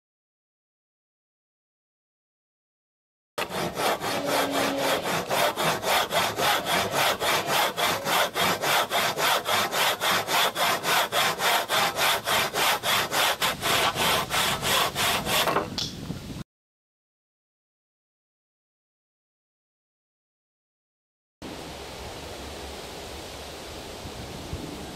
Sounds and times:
Wood: 3.4s - 16.0s.

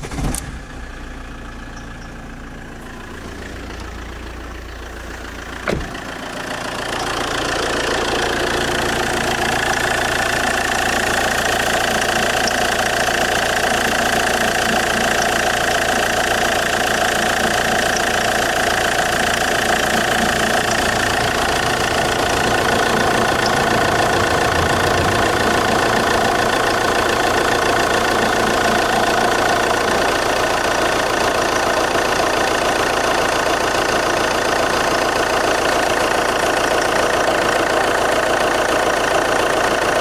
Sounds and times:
Vibration: 1.6s - 30.7s.

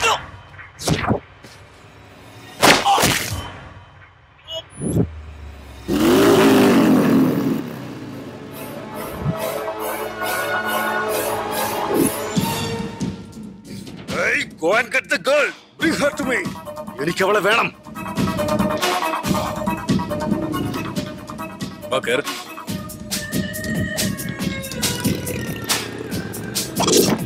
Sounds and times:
Outside, urban or manmade: 0.0s - 27.2s
Music: 0.1s - 5.9s, 8.4s - 27.2s
Speech: 14.1s - 17.8s, 21.9s - 22.4s.

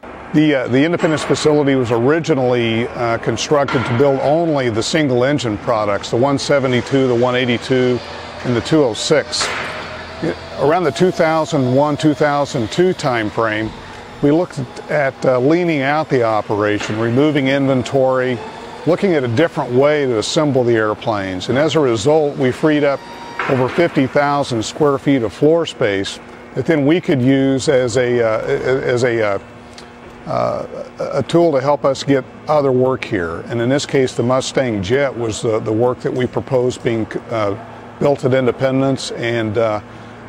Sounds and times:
Speech: 0.4s - 9.5s, 10.2s - 29.4s, 30.3s - 39.8s.

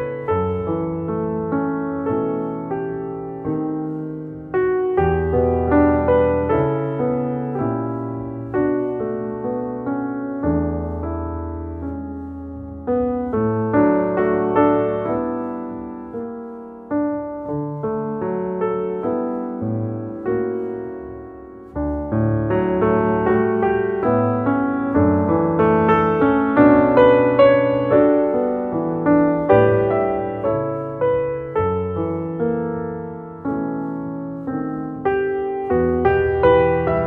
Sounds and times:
Music: 0.0s - 37.0s.

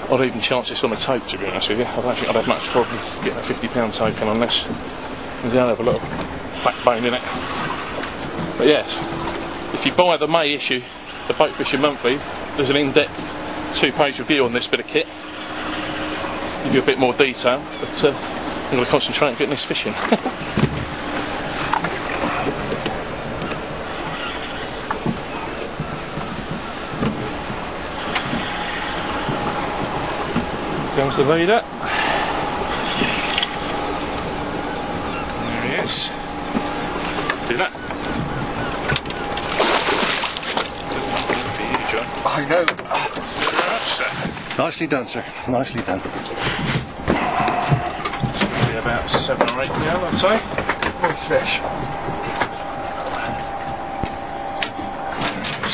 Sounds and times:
Boat, Water vehicle: 0.0s - 55.7s
Outside, rural or natural: 0.0s - 55.7s
Speech: 0.1s - 4.8s, 5.4s - 6.0s, 9.8s - 13.1s, 13.7s - 15.1s, 16.6s - 20.0s, 31.0s - 31.7s, 35.4s - 36.2s, 48.4s - 51.7s.

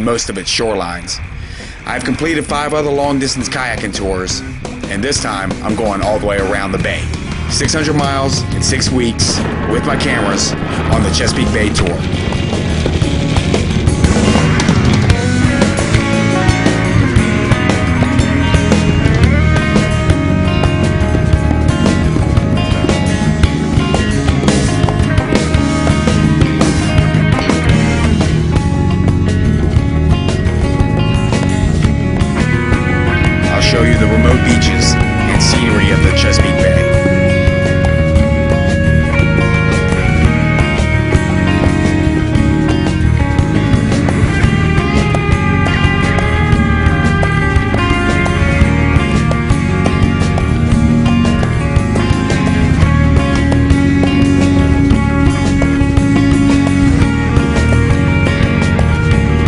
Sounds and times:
Speech: 0.0s - 1.2s, 1.8s - 12.1s, 33.5s - 37.0s
Music: 0.0s - 59.4s.

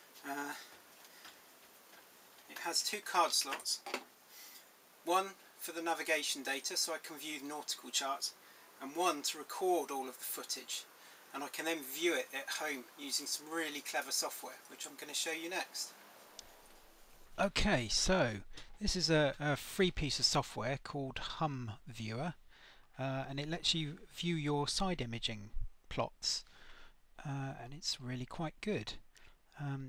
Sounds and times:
Speech: 0.2s - 0.7s, 2.5s - 3.9s, 5.0s - 15.9s, 17.4s - 22.4s, 23.0s - 26.5s, 27.2s - 29.0s, 29.6s - 29.8s.

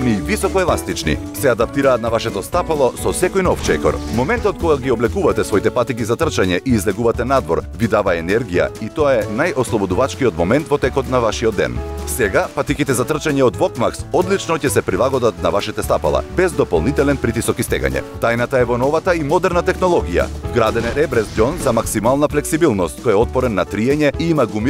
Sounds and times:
Music: 0.0s - 24.6s
Speech: 0.0s - 24.6s.

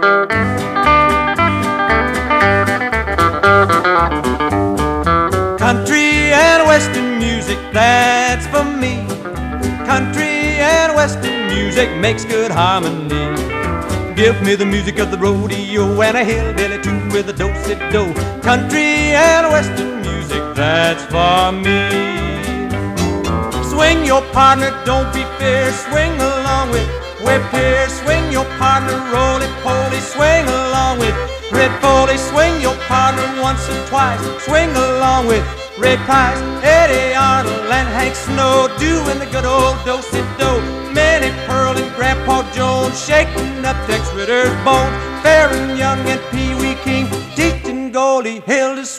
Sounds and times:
Country: 0.0s - 48.9s.

